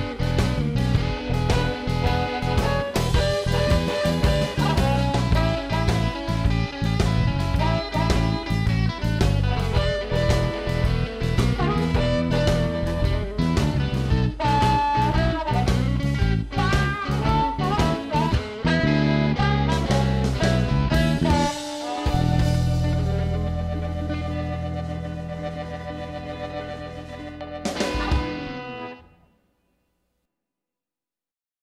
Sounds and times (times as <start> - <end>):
Music: 0.0 - 30.0.